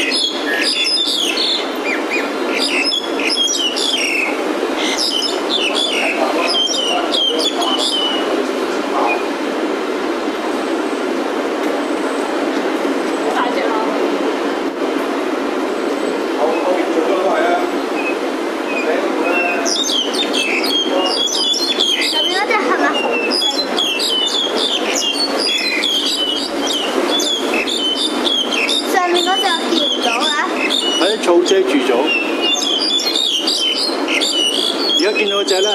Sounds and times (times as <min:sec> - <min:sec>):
Chirp, tweet: 0:00.0 - 0:08.3, 0:18.0 - 0:31.3, 0:32.0 - 0:35.7
Speech: 0:05.7 - 0:09.4, 0:13.3 - 0:14.6, 0:16.4 - 0:17.8, 0:18.8 - 0:19.8, 0:20.7 - 0:23.8, 0:28.9 - 0:32.2, 0:35.0 - 0:35.7.